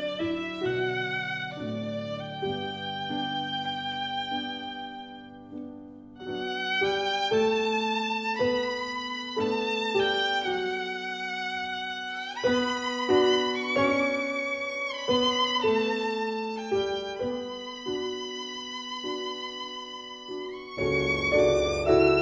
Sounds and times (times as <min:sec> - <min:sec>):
Violin, fiddle: 0:00.0 - 0:22.2.